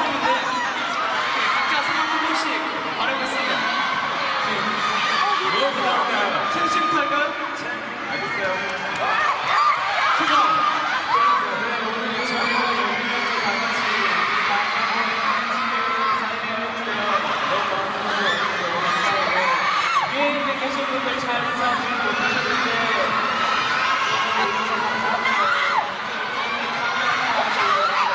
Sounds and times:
Male speech, man speaking: 0.0s - 0.7s, 1.6s - 3.8s, 4.4s - 9.4s, 10.0s - 28.1s.

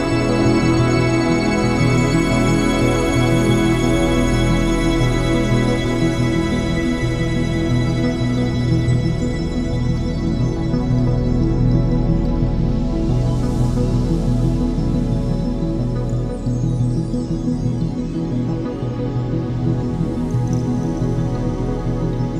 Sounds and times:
Ambient music: 0.0s - 22.3s.

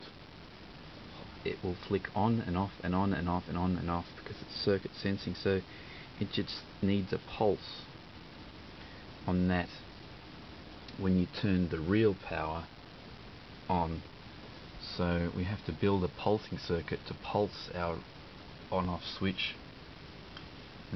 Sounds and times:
Speech: 1.4s - 7.9s, 9.2s - 9.9s, 10.9s - 12.7s, 13.7s - 14.1s, 14.8s - 18.0s, 18.7s - 19.6s.

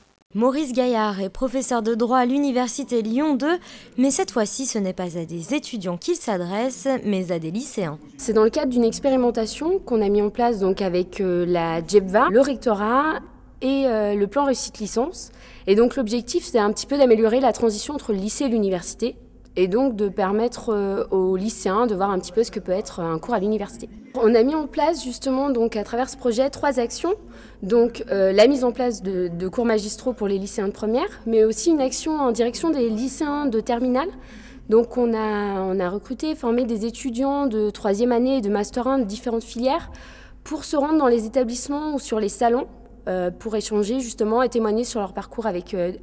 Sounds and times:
Speech: 0.4s - 39.9s, 40.5s - 46.0s.

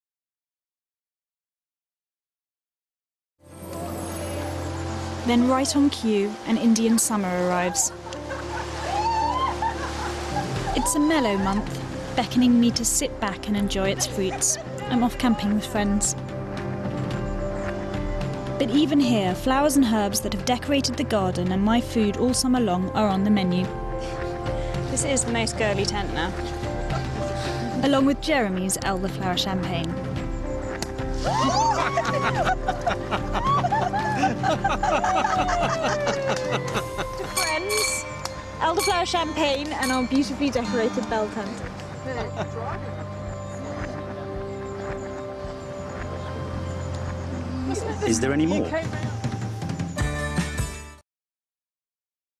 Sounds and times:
Music: 3.4s - 51.0s.

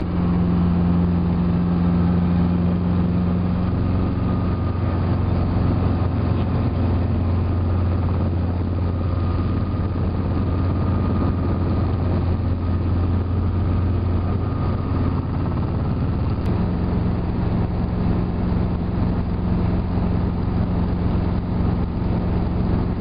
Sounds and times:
Helicopter: 0.0s - 23.0s.

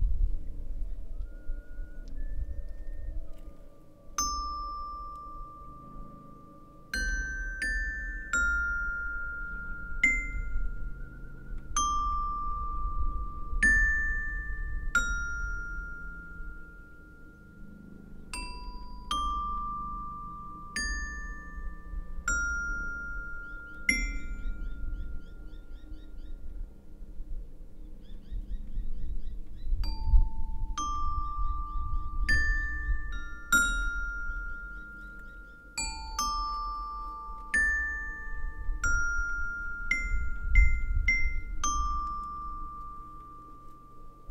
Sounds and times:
Glockenspiel: 1.0s - 27.5s, 29.8s - 44.3s
Marimba, xylophone: 4.2s - 26.1s, 29.8s - 44.3s.

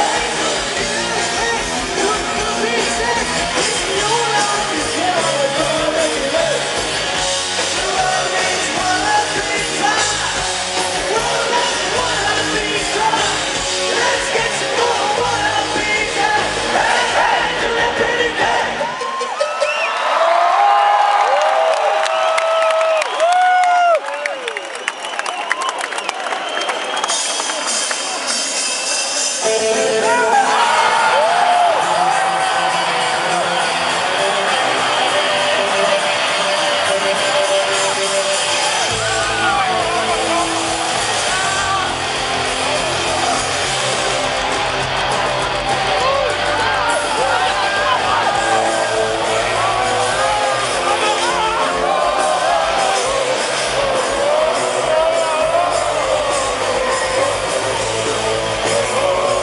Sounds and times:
Music: 0.0s - 19.9s, 25.8s - 59.4s.

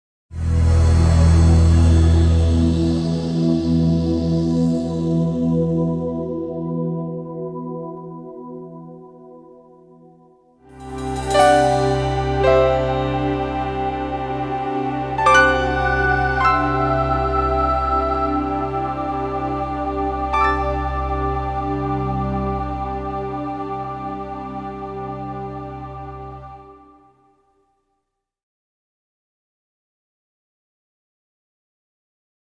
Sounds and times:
Music: 0.4s - 28.3s.

